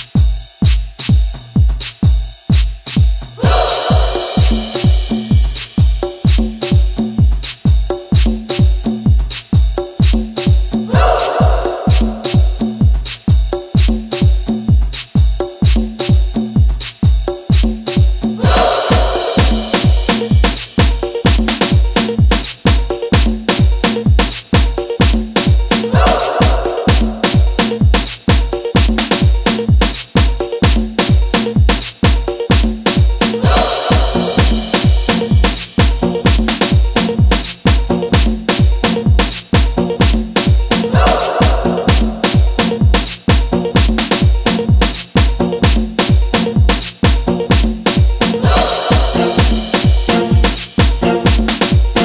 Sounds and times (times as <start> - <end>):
Dubstep: 3.4 - 5.8, 18.4 - 22.7, 25.4 - 30.2, 33.2 - 37.7, 38.5 - 45.1, 48.3 - 52.0.